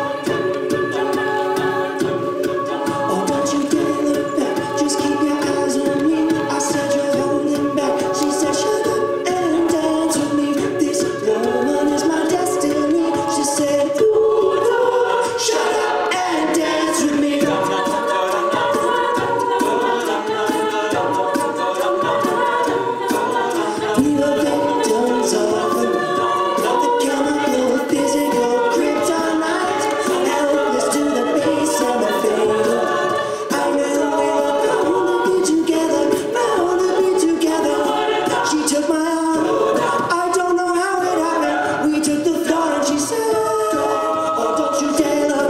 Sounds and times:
A capella: 0.0 - 45.4
Choir: 0.0 - 45.4.

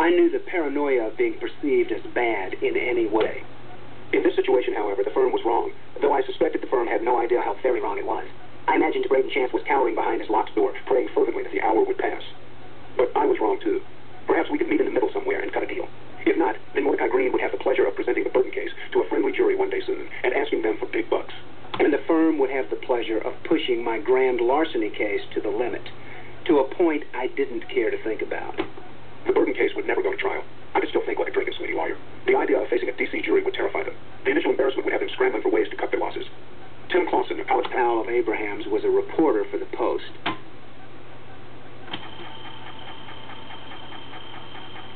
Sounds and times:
Male speech, man speaking: 0.0 - 3.5, 4.1 - 12.4, 13.0 - 28.7, 29.3 - 40.2
Speech synthesizer: 29.3 - 36.3.

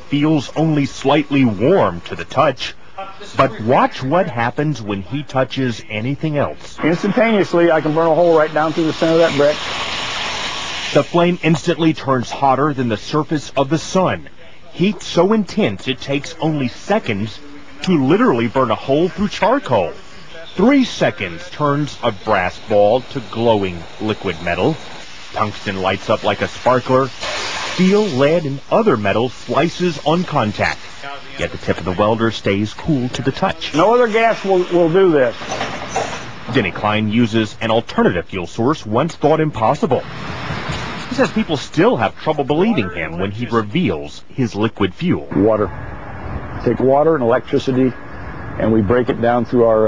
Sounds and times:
Speech: 0.0 - 9.6, 10.9 - 24.8, 25.4 - 27.2, 27.8 - 35.4, 36.5 - 40.0, 41.1 - 45.7, 46.6 - 48.0, 48.6 - 49.8.

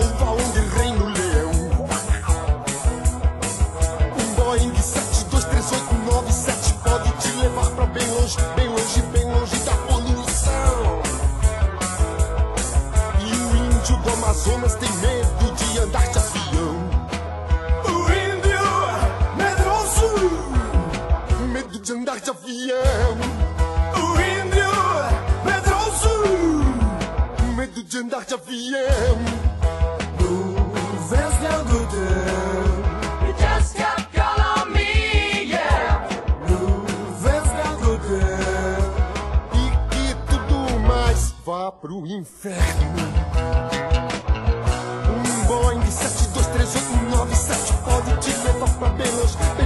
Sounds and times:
Music: 0.0 - 41.7, 42.5 - 49.6.

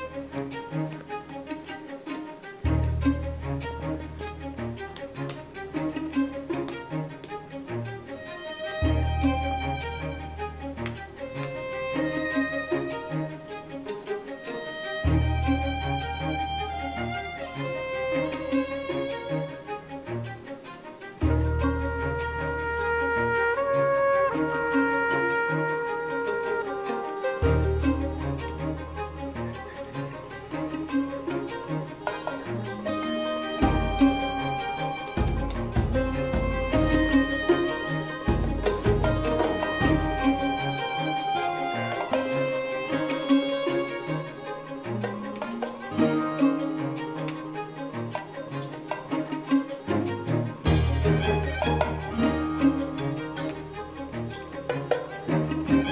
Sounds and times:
Music: 0.0 - 55.9.

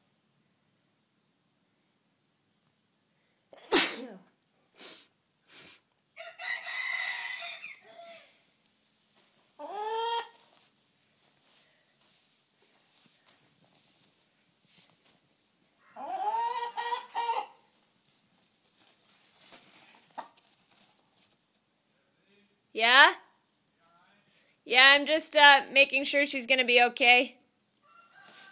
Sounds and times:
Cluck: 15.9 - 17.6, 20.0 - 20.4.

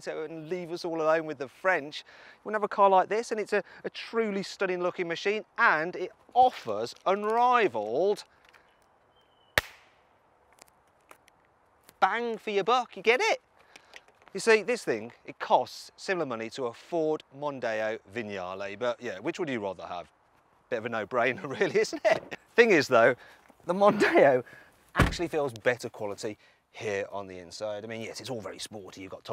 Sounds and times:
Speech: 0.0 - 8.3, 12.0 - 13.4, 14.4 - 20.1, 20.7 - 29.3.

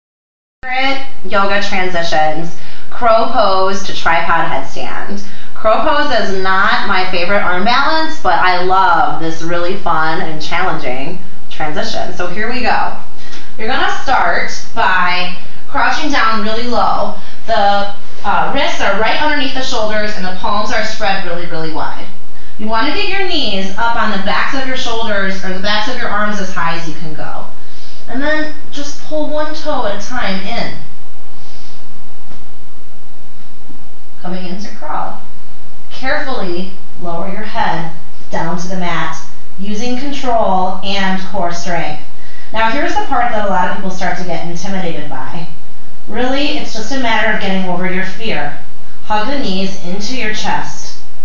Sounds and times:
Speech: 0.6 - 27.5, 28.1 - 30.9, 34.2 - 35.2, 35.9 - 51.0.

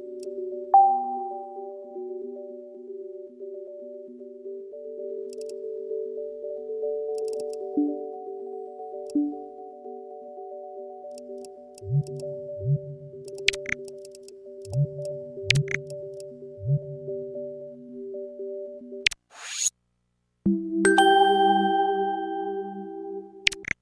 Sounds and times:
Music: 0.0 - 19.1, 20.5 - 23.8.

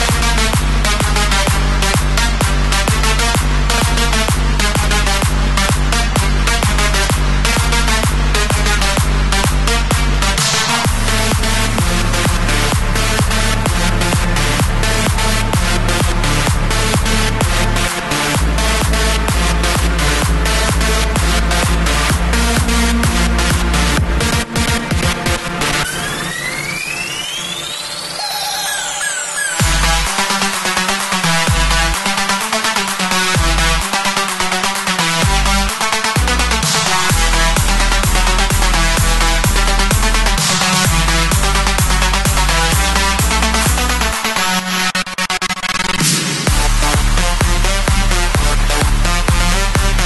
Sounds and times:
Music: 0.0 - 50.0.

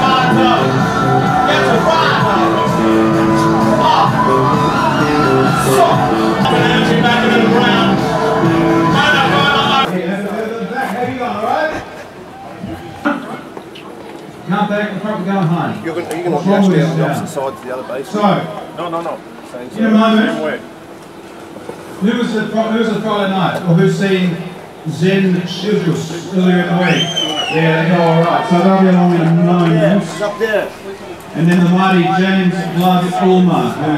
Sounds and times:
Speech: 8.9 - 11.9, 22.0 - 33.9.

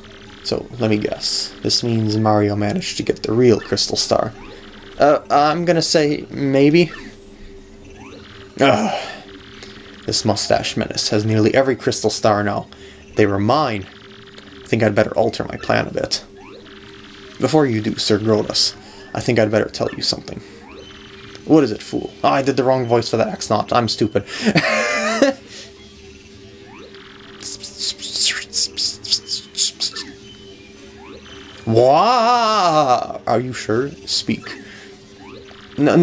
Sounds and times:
Speech: 0.4 - 4.4, 5.0 - 7.0, 10.1 - 13.9, 14.7 - 16.3, 17.4 - 20.4, 21.5 - 24.3, 27.4 - 30.1, 31.7 - 34.6, 35.8 - 36.0.

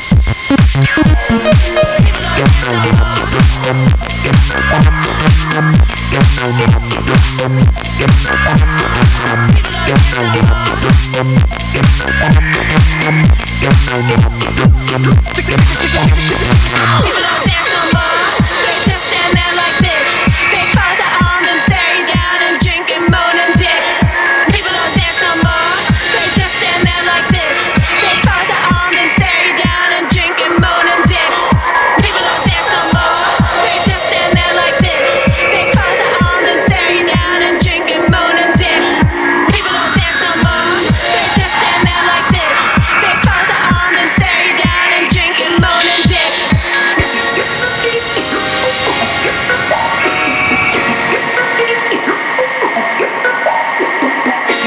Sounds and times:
Electronic dance music: 0.0 - 54.6.

